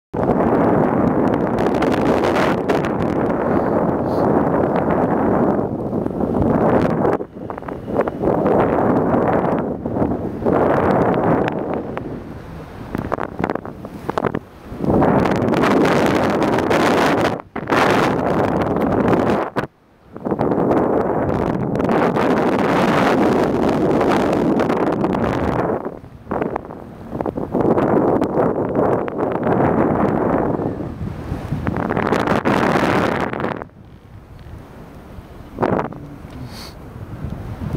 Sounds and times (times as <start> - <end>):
Wind noise (microphone): 0.1 - 37.7.